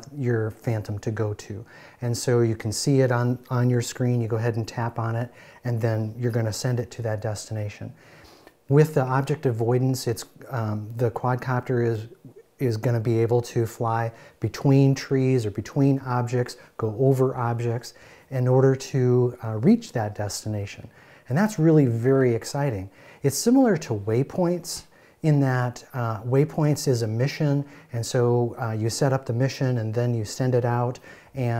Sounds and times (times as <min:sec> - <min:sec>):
Speech: 0:00.0 - 0:08.0, 0:08.7 - 0:31.5.